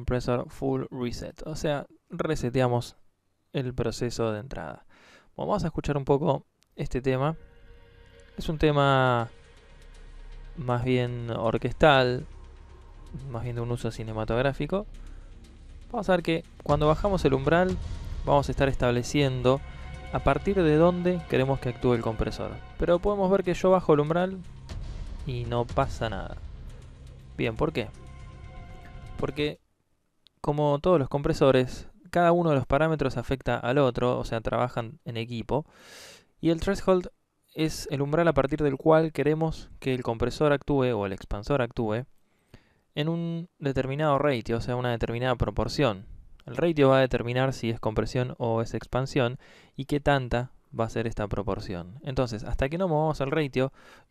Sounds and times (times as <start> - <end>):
Speech: 0.0 - 7.4, 8.4 - 9.4, 10.6 - 12.3, 13.2 - 14.9, 15.9 - 24.4, 25.3 - 26.4, 27.4 - 28.0, 29.2 - 29.6, 30.4 - 35.7, 36.4 - 42.1, 43.0 - 53.8
Music: 7.0 - 29.6.